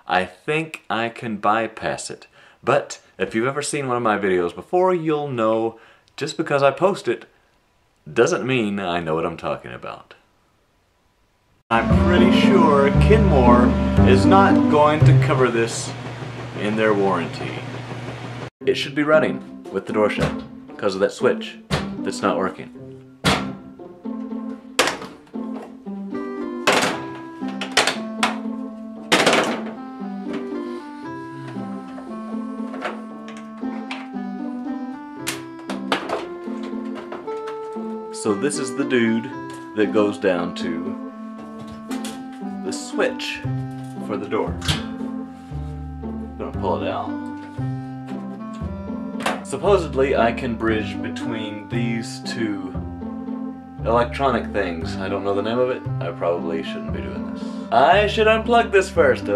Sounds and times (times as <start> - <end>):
Speech: 0.1 - 7.3, 8.1 - 10.2, 11.7 - 16.0, 16.6 - 17.7, 18.6 - 22.8, 38.2 - 41.0, 42.7 - 43.4, 44.1 - 44.6, 46.4 - 47.2, 49.4 - 52.8, 53.8 - 59.3
Music: 11.7 - 17.7, 18.6 - 59.3.